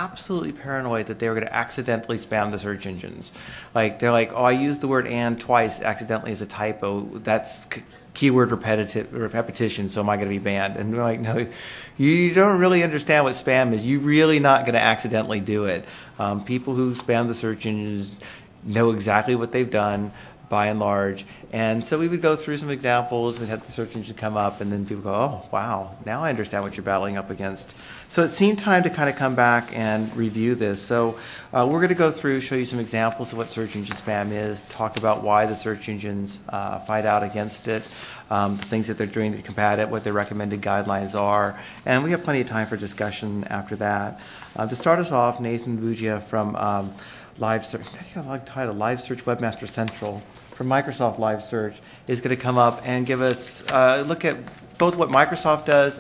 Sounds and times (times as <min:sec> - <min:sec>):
Speech: 0:00.0 - 0:56.0.